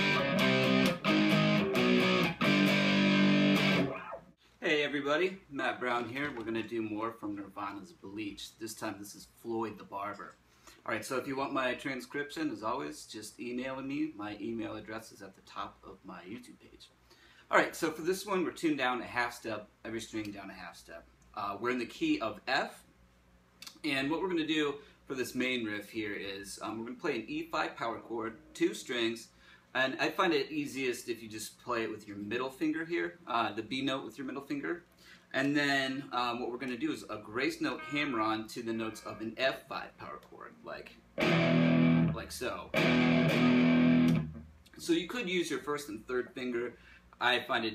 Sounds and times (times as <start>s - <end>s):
Guitar: 0.0s - 4.4s, 36.6s - 44.8s
Speech: 3.9s - 22.9s, 23.7s - 41.0s, 42.1s - 42.8s, 44.7s - 47.7s.